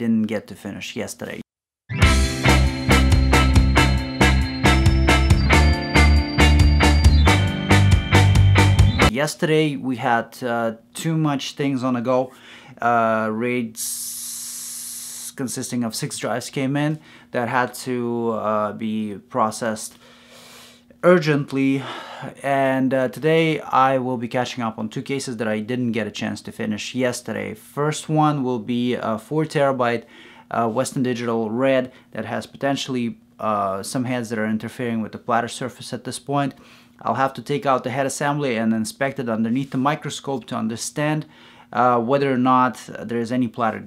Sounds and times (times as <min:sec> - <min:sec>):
Speech: 0:00.0 - 0:01.5, 0:09.1 - 0:20.0, 0:21.0 - 0:43.8.